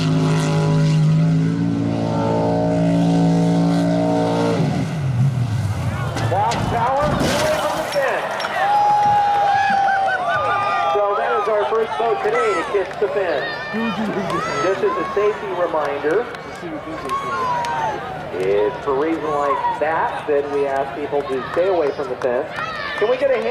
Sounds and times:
Motorboat, speedboat: 0:00.0 - 0:06.6.

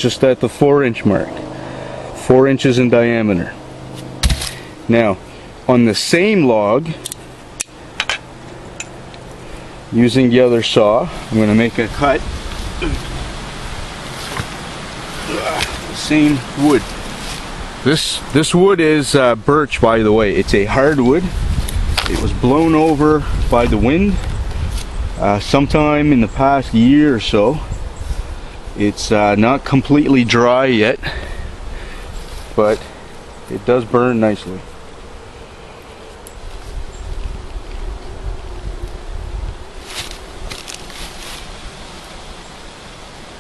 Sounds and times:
Speech: 0:00.0 - 0:01.4, 0:02.2 - 0:03.6, 0:04.9 - 0:07.0, 0:09.9 - 0:12.2, 0:15.3 - 0:16.9, 0:17.9 - 0:21.4, 0:22.1 - 0:24.2, 0:25.2 - 0:27.7, 0:28.8 - 0:31.2, 0:32.6 - 0:32.9, 0:33.5 - 0:34.7
Rustling leaves: 0:00.0 - 0:43.4.

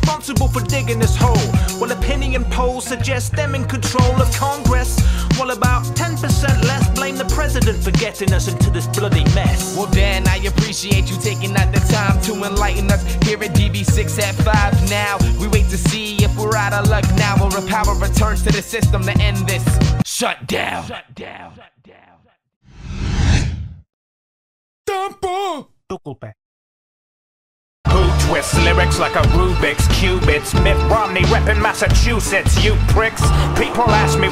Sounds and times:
Music: 0:00.0 - 0:20.0, 0:27.9 - 0:34.3
Rapping: 0:00.0 - 0:22.2, 0:27.9 - 0:34.3.

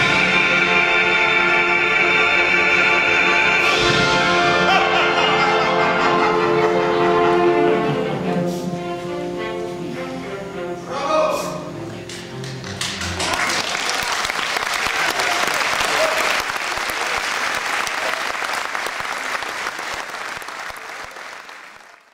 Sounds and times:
Applause: 0:12.4 - 0:22.1.

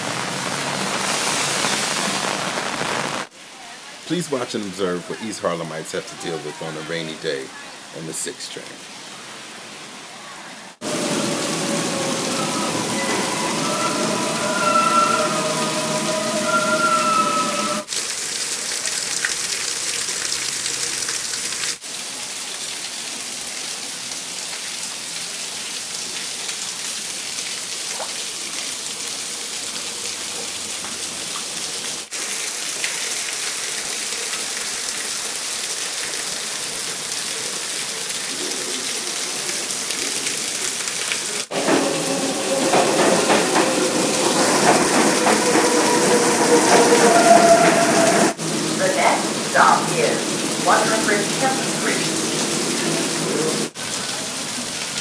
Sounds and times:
Railroad car, train wagon: 0:10.8 - 0:17.9, 0:41.5 - 0:53.7
Subway, metro, underground: 0:10.8 - 0:17.9, 0:41.5 - 0:53.7
Train: 0:10.8 - 0:17.9, 0:41.5 - 0:53.7
Clickety-clack: 0:41.6 - 0:45.8.

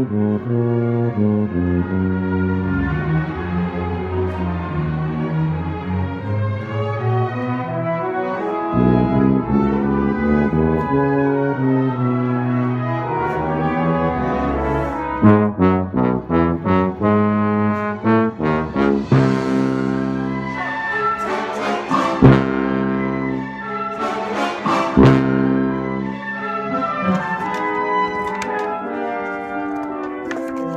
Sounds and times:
Trombone: 0:00.0 - 0:05.5, 0:06.6 - 0:30.7.

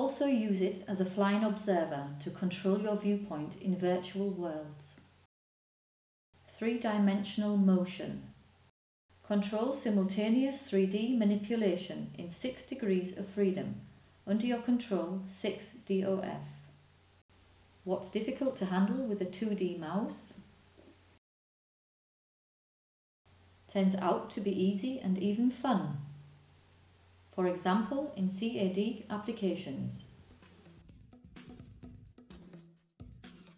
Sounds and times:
Speech: 0:00.0 - 0:05.0, 0:06.5 - 0:08.3, 0:09.3 - 0:16.6, 0:17.9 - 0:20.4, 0:23.7 - 0:26.1, 0:27.4 - 0:30.1.

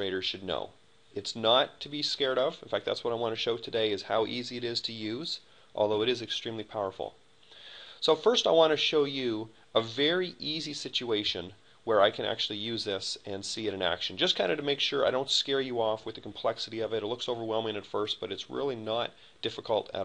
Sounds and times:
Speech: 0:00.0 - 0:07.2, 0:08.0 - 0:20.0.

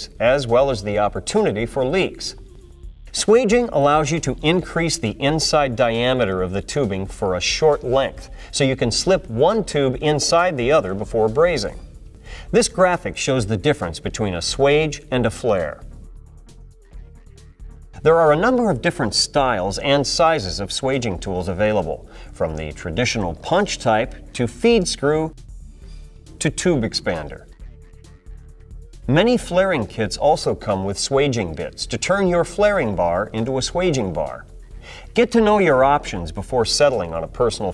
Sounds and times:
Speech: 0:00.0 - 0:02.4, 0:03.2 - 0:11.9, 0:12.5 - 0:15.8, 0:18.0 - 0:25.4, 0:26.4 - 0:27.5, 0:29.1 - 0:34.5, 0:35.2 - 0:37.7.

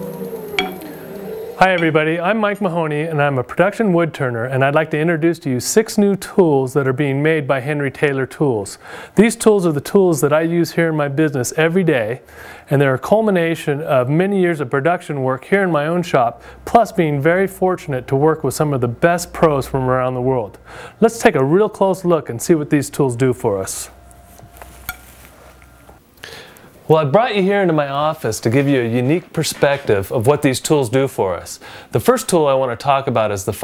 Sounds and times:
Speech: 0:01.6 - 0:24.0, 0:26.9 - 0:33.6.

